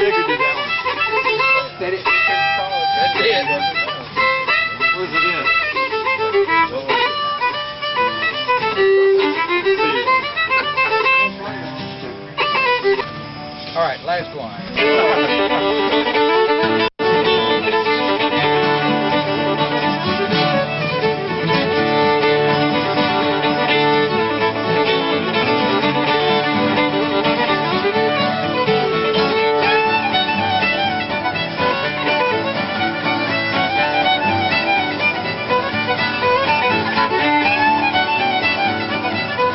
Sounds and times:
Speech: 0:01.3 - 0:05.7, 0:06.5 - 0:07.2, 0:13.8 - 0:15.9.

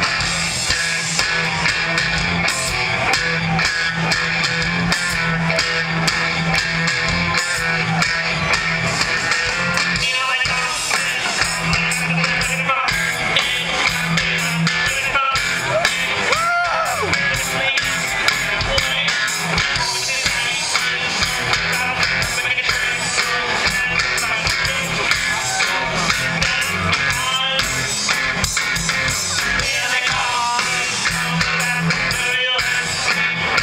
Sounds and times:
Music: 0:00.0 - 0:33.6.

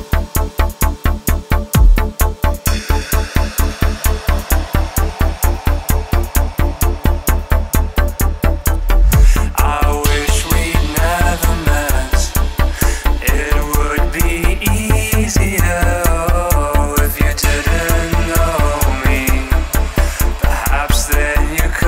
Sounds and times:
Dubstep: 0:00.0 - 0:21.8.

